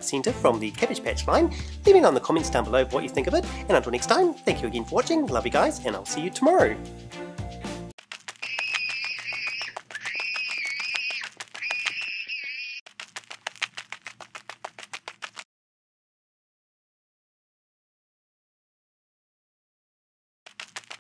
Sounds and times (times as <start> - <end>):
Speech: 0.0 - 6.8
Music: 0.0 - 8.0.